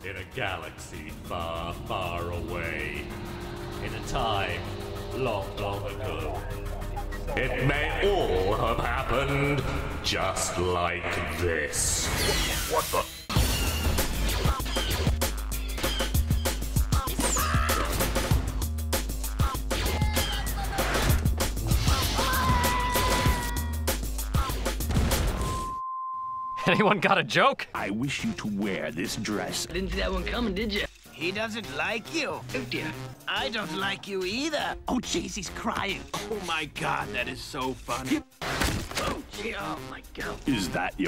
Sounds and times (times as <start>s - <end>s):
Music: 0.0s - 25.7s, 26.6s - 41.0s
Speech: 7.3s - 12.1s, 26.6s - 38.2s, 39.0s - 41.0s.